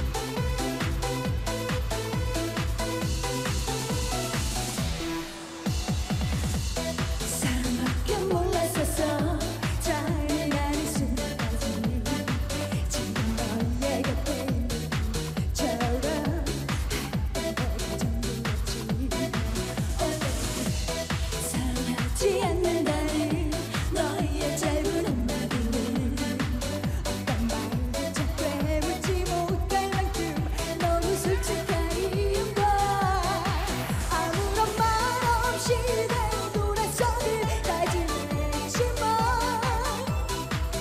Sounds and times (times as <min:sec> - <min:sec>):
Exciting music: 0:00.0 - 0:40.8.